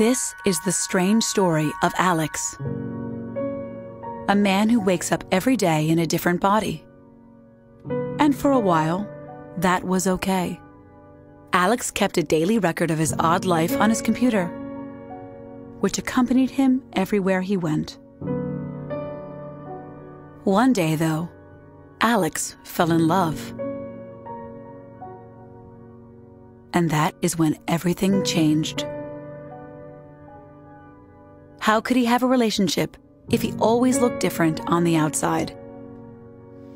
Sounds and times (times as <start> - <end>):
Speech: 0.0 - 2.6, 4.3 - 6.8, 8.2 - 10.6, 11.6 - 14.5, 15.8 - 18.0, 20.5 - 21.3, 22.0 - 23.6, 26.8 - 28.9, 31.6 - 35.6
Music: 0.0 - 36.7.